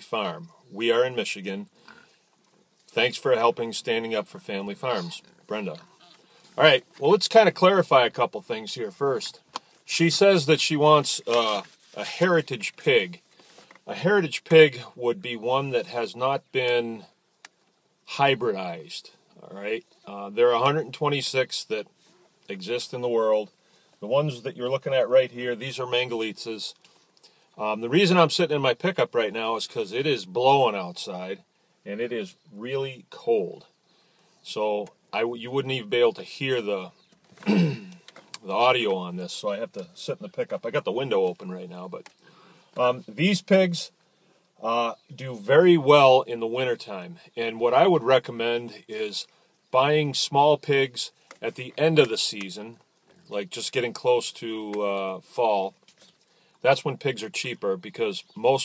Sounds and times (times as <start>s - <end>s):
Speech: 0.0s - 1.7s, 2.9s - 13.2s, 13.9s - 17.1s, 18.1s - 21.9s, 22.5s - 26.8s, 27.6s - 33.7s, 34.4s - 37.7s, 38.4s - 42.1s, 42.8s - 44.0s, 44.6s - 55.8s, 56.6s - 58.6s.